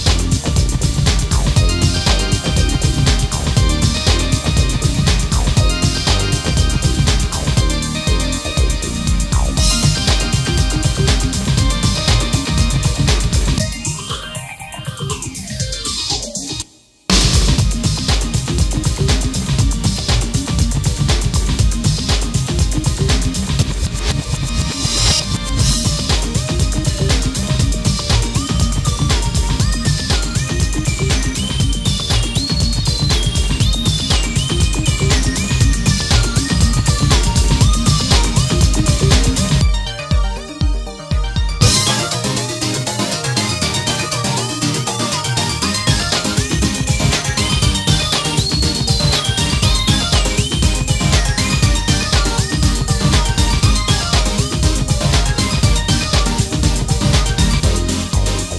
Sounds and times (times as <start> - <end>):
Soundtrack music: 0.0 - 58.5
Video game music: 0.0 - 58.5.